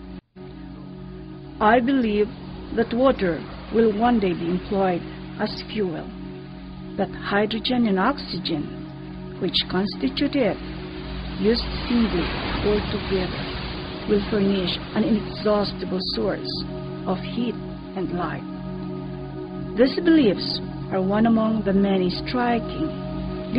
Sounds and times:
Music: 0:00.0 - 0:23.5
Speech: 0:01.6 - 0:06.1, 0:07.0 - 0:08.7, 0:09.4 - 0:10.6, 0:11.4 - 0:13.3, 0:14.1 - 0:18.4, 0:19.8 - 0:22.9.

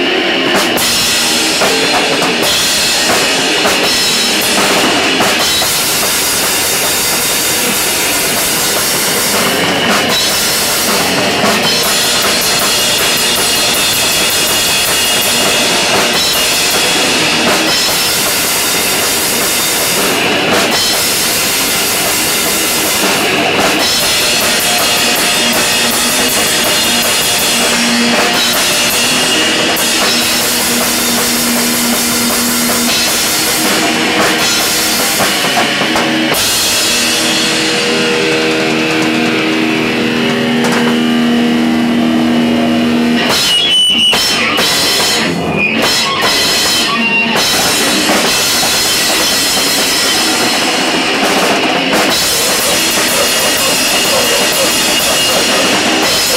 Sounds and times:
Music: 0:00.0 - 0:56.3.

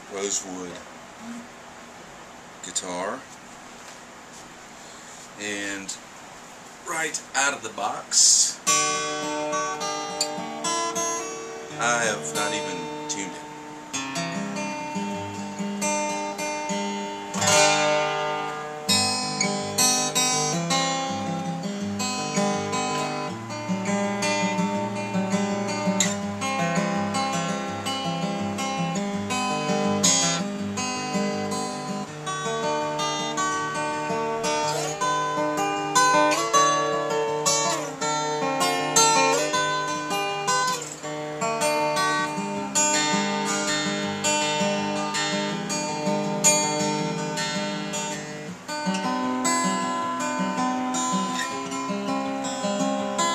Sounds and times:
Speech: 0:00.1 - 0:00.8, 0:02.6 - 0:03.3, 0:05.4 - 0:06.0, 0:06.8 - 0:08.7, 0:11.8 - 0:13.4
Steel guitar, slide guitar: 0:13.9 - 0:53.3.

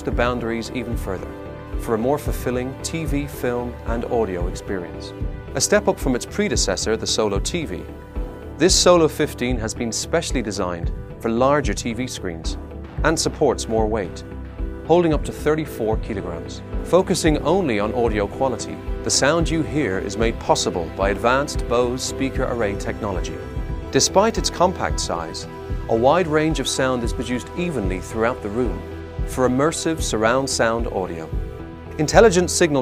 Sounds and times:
Speech: 0:00.0 - 0:07.9, 0:08.6 - 0:14.2, 0:14.9 - 0:31.4, 0:32.0 - 0:32.8
Music: 0:00.0 - 0:32.8.

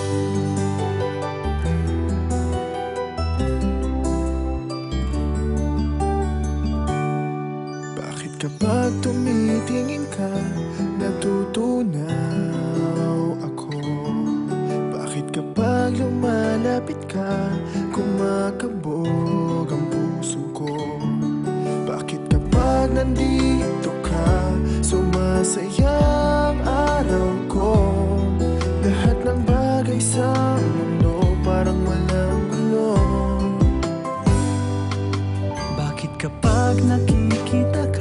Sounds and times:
Soul music: 0:00.0 - 0:38.0.

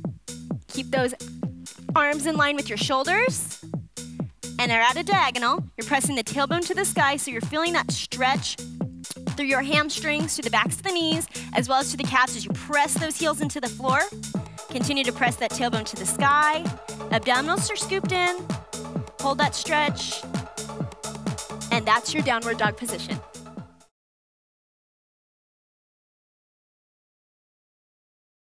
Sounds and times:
Music: 0:00.0 - 0:23.9
Speech: 0:00.7 - 0:01.2, 0:01.9 - 0:03.6, 0:04.6 - 0:08.6, 0:09.4 - 0:14.1, 0:14.7 - 0:18.4, 0:19.2 - 0:20.2, 0:21.7 - 0:23.2.

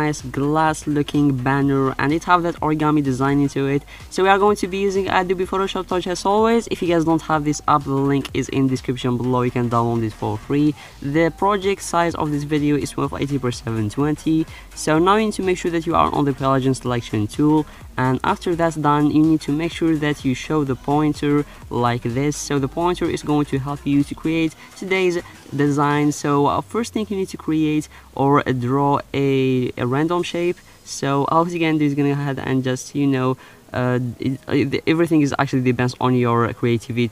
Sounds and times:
Music: 0:00.0 - 0:37.1
Speech: 0:00.0 - 0:37.1.

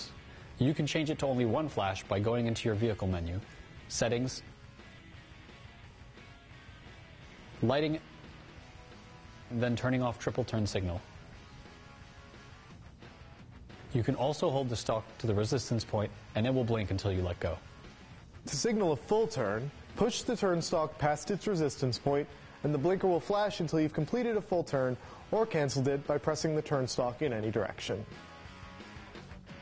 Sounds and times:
Speech: 0:00.0 - 0:04.5, 0:07.6 - 0:08.0, 0:09.5 - 0:11.1, 0:13.9 - 0:17.6, 0:18.5 - 0:28.1.

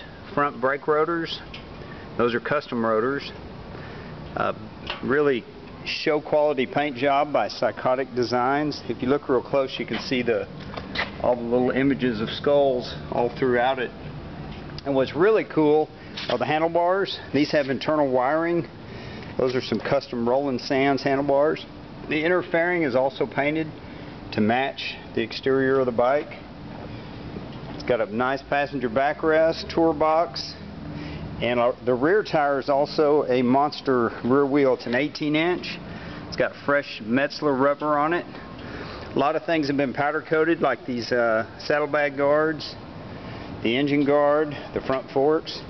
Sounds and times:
Speech: 0:00.0 - 0:01.5, 0:02.2 - 0:03.4, 0:04.4 - 0:10.5, 0:11.2 - 0:14.0, 0:14.8 - 0:18.7, 0:19.4 - 0:26.4, 0:27.8 - 0:30.7, 0:31.4 - 0:38.4, 0:39.2 - 0:42.8, 0:43.6 - 0:45.6.

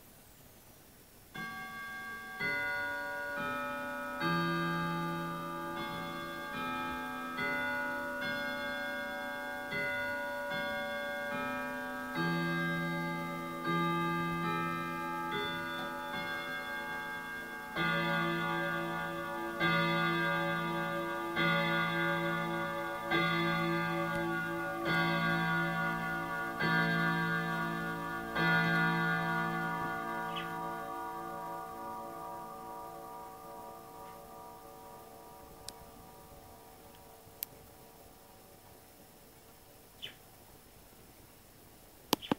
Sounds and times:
Church bell: 0:01.4 - 0:38.4.

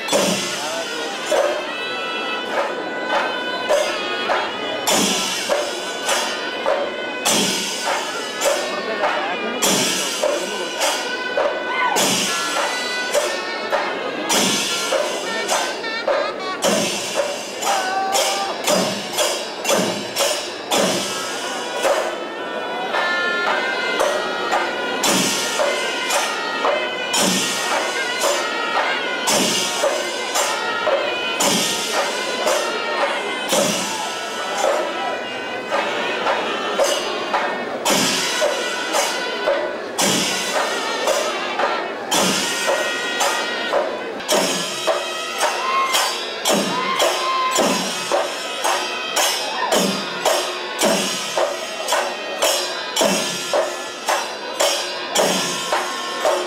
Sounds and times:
Speech: 0:00.0 - 0:56.4.

